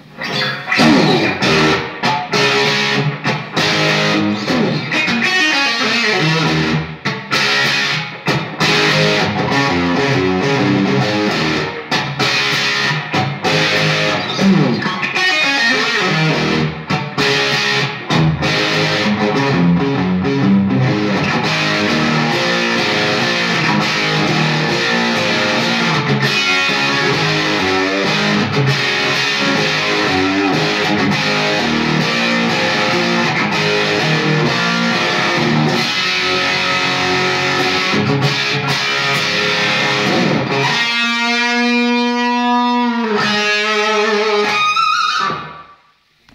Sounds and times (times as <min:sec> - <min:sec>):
Music: 0:00.0 - 0:46.3.